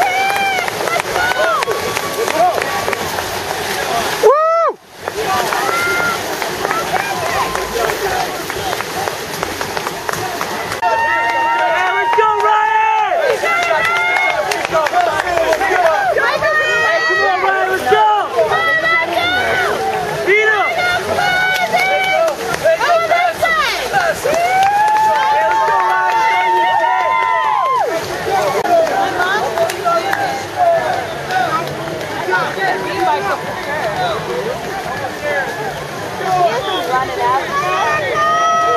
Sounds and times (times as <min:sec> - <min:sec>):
Outside, rural or natural: 0:00.0 - 0:38.7.